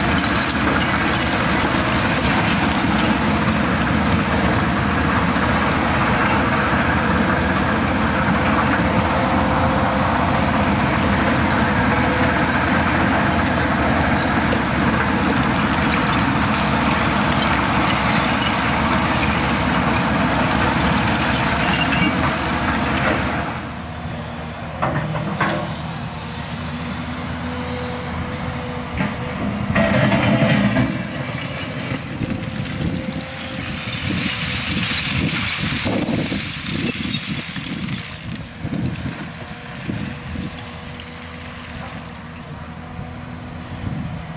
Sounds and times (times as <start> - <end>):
Vehicle: 0.0 - 44.3.